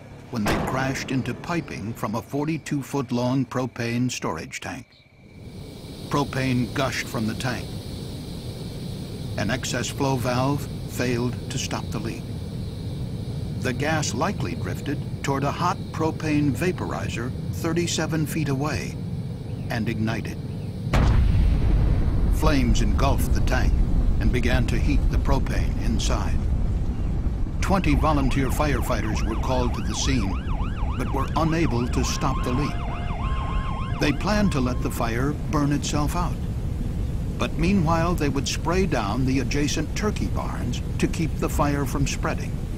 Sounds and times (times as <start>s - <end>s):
Speech: 0.3s - 4.9s, 6.1s - 7.7s, 9.4s - 12.2s, 13.6s - 19.0s, 19.7s - 20.4s, 22.4s - 26.4s, 27.6s - 30.4s, 31.0s - 32.8s, 34.0s - 36.4s, 37.4s - 42.5s
Explosion: 0.4s - 2.0s, 20.9s - 28.1s.